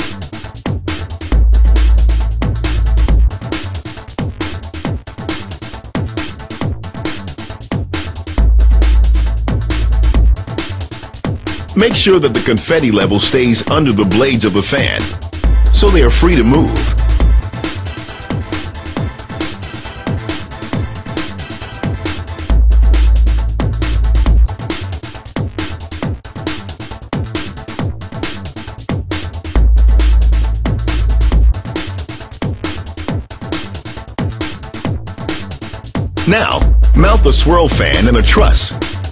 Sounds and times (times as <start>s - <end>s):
Trance music: 0.0s - 24.7s, 29.6s - 32.0s, 36.2s - 39.1s
Speech: 11.8s - 15.1s, 15.7s - 17.0s, 36.2s - 38.8s.